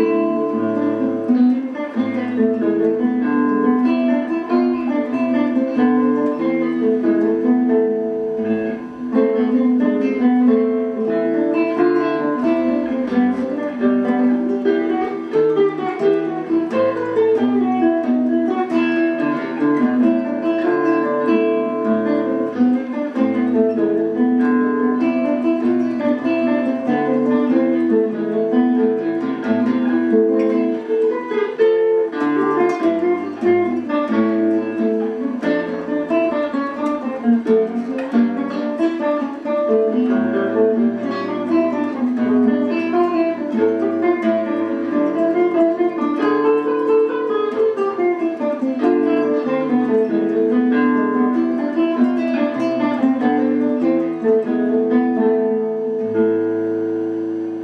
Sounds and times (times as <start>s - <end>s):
Acoustic guitar: 0.0s - 57.6s
Strum: 0.0s - 57.6s.